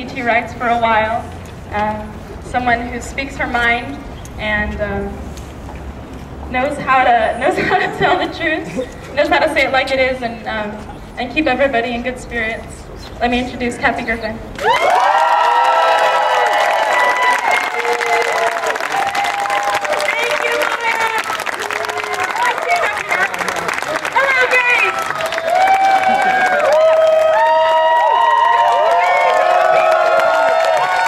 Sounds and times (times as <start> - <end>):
Female speech, woman speaking: 1.8 - 5.2, 6.5 - 14.4, 20.0 - 21.3, 22.4 - 25.0.